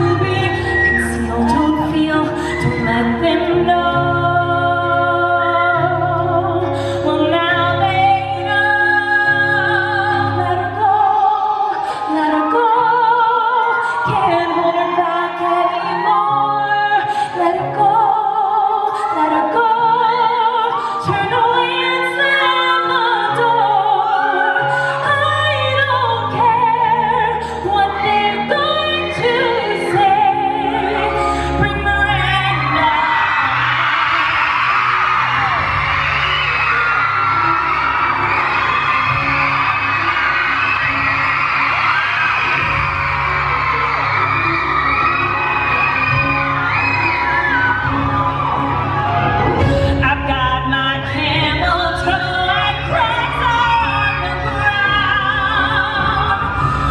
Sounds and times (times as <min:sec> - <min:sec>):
Opera: 0:00.0 - 0:56.9.